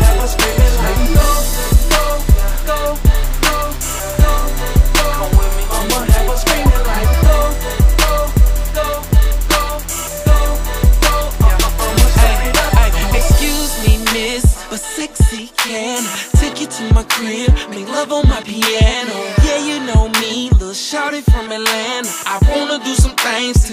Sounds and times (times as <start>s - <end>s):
Music: 0.0s - 23.7s.